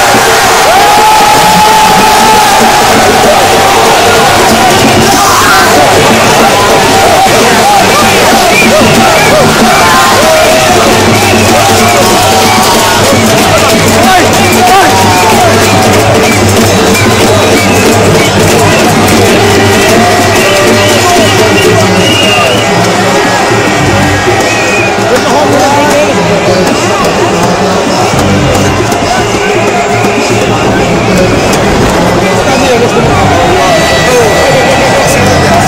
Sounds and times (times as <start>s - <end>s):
Music: 0.0s - 35.6s
Speech: 1.6s - 35.6s.